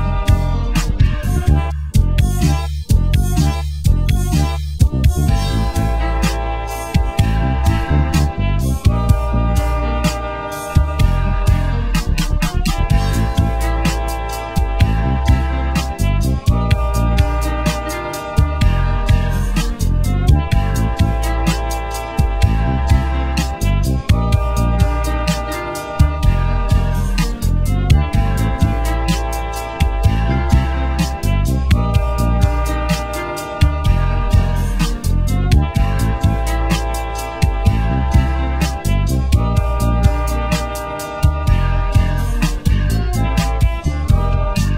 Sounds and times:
Music: 0:00.0 - 0:44.7.

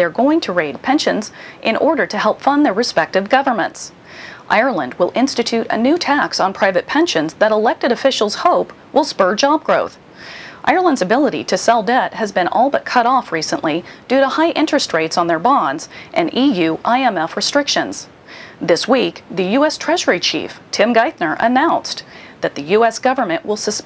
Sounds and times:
Speech: 0:00.0 - 0:10.0, 0:10.6 - 0:23.8.

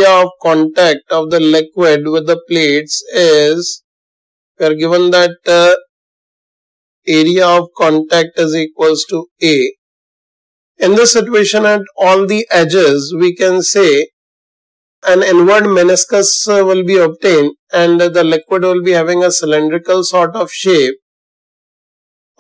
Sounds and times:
Speech: 0:00.0 - 0:03.8, 0:04.6 - 0:05.9, 0:07.1 - 0:09.8, 0:10.8 - 0:14.1, 0:15.0 - 0:21.0.

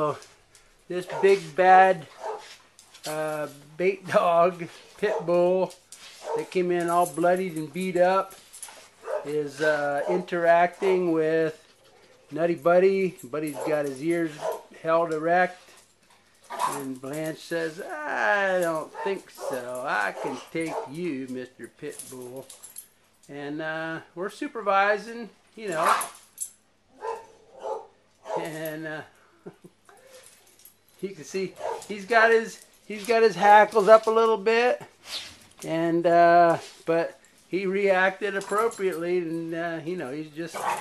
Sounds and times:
Speech: 0:00.0 - 0:00.2, 0:00.9 - 0:02.1, 0:03.1 - 0:05.8, 0:06.4 - 0:08.4, 0:09.3 - 0:11.6, 0:12.4 - 0:15.6, 0:16.6 - 0:22.5, 0:23.3 - 0:26.2, 0:28.4 - 0:29.1, 0:31.0 - 0:34.9, 0:35.6 - 0:40.8
Dog: 0:01.1 - 0:01.5, 0:02.1 - 0:02.6, 0:05.0 - 0:05.3, 0:06.2 - 0:06.6, 0:09.0 - 0:09.3, 0:10.0 - 0:10.4, 0:13.5 - 0:14.7, 0:16.5 - 0:16.9, 0:18.9 - 0:21.0, 0:25.8 - 0:26.2, 0:27.0 - 0:28.6, 0:31.6 - 0:31.9, 0:40.6 - 0:40.8.

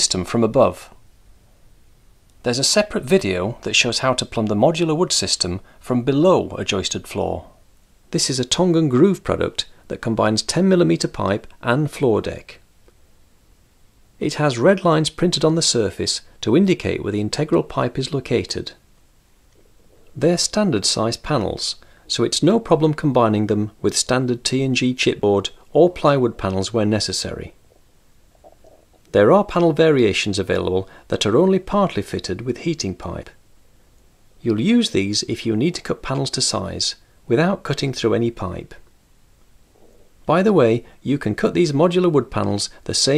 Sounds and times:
Speech: 0:00.0 - 0:01.0, 0:02.4 - 0:12.6, 0:14.2 - 0:18.8, 0:20.2 - 0:27.6, 0:29.1 - 0:33.4, 0:34.4 - 0:38.9, 0:40.3 - 0:43.1.

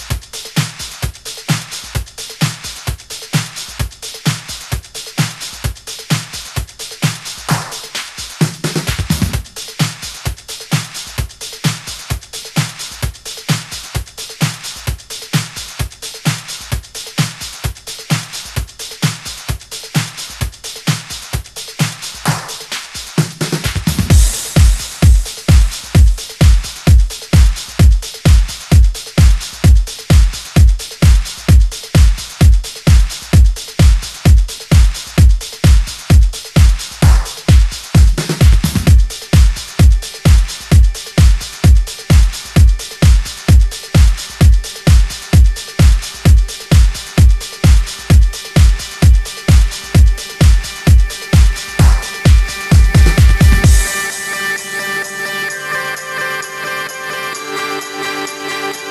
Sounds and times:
Music: 0:00.0 - 0:58.9.

